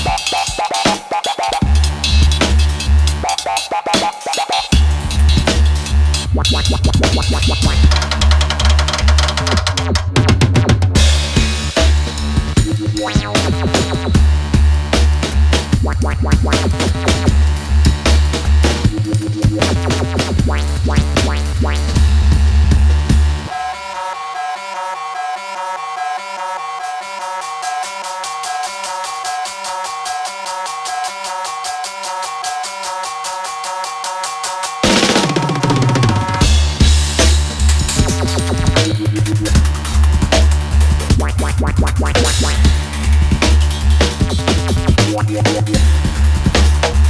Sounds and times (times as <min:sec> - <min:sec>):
Drum roll: 0:00.0 - 0:23.6, 0:27.2 - 0:47.0
Drum kit: 0:00.0 - 0:23.9, 0:26.8 - 0:47.0
Bass drum: 0:01.6 - 0:03.2, 0:04.7 - 0:23.5, 0:34.9 - 0:47.0.